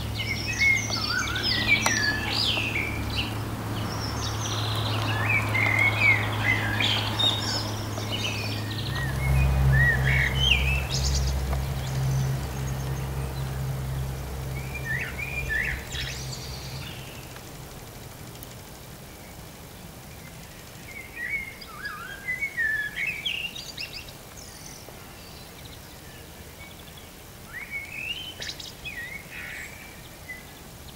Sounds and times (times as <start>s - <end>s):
Bird vocalization, bird call, bird song: 0.0s - 17.4s, 19.1s - 30.9s.